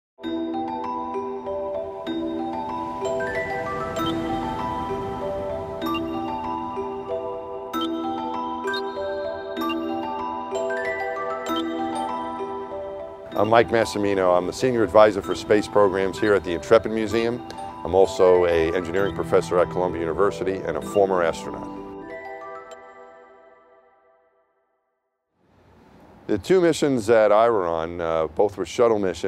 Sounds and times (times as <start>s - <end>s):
Marimba, xylophone: 0.2s - 23.6s
Glockenspiel: 0.2s - 24.4s.